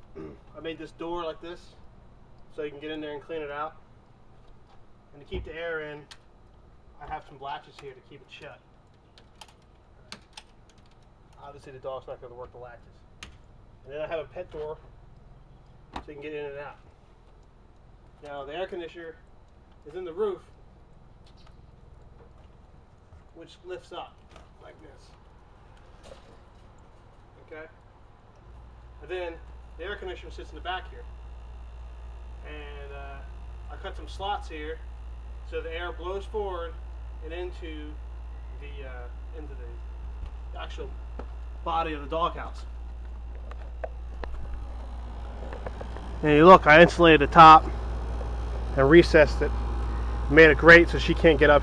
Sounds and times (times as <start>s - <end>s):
Speech: 0.5s - 1.8s, 2.5s - 3.8s, 5.1s - 6.1s, 7.0s - 8.6s, 11.4s - 13.0s, 13.8s - 14.8s, 16.0s - 16.8s, 18.2s - 19.2s, 19.8s - 20.5s, 23.4s - 25.2s, 27.4s - 27.8s, 29.0s - 31.1s, 32.4s - 34.8s, 35.5s - 38.0s, 38.6s - 39.8s, 40.6s - 41.0s, 41.7s - 42.7s, 46.2s - 47.7s, 48.7s - 49.5s, 50.3s - 51.6s.